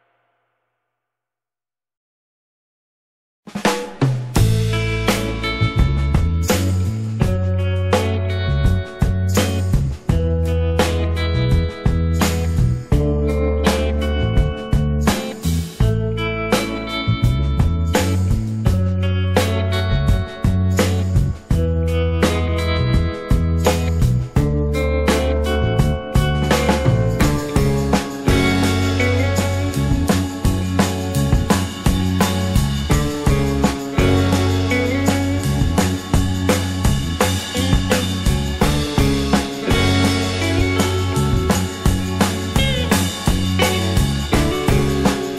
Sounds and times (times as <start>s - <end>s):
Music: 3.5s - 45.3s.